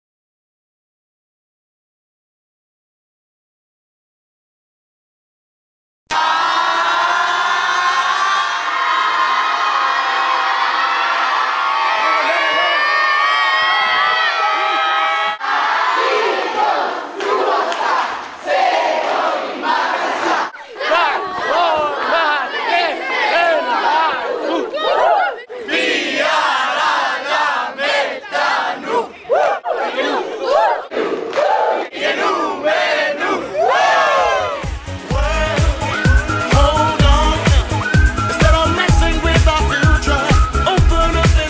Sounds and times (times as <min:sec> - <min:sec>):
Inside, large room or hall: 0:06.1 - 0:26.4, 0:28.2 - 0:41.5.